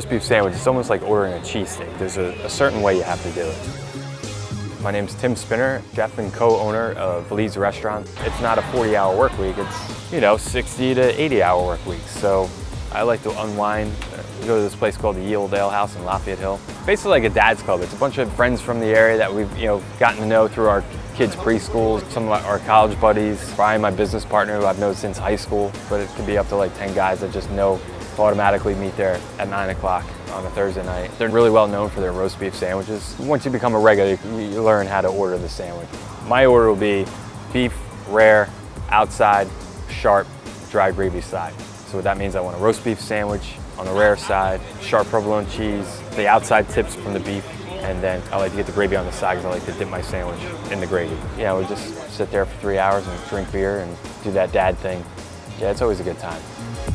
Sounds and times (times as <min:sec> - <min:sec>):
Speech: 0:00.0 - 0:03.7, 0:04.8 - 0:56.4
Music: 0:00.0 - 0:56.9.